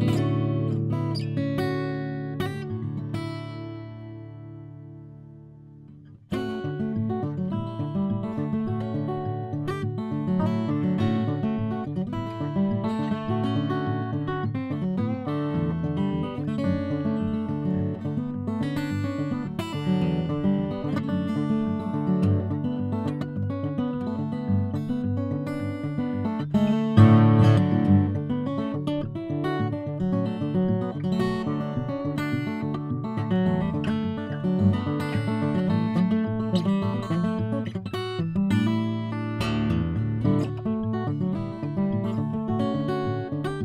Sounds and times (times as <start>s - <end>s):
Acoustic guitar: 0.0s - 43.6s.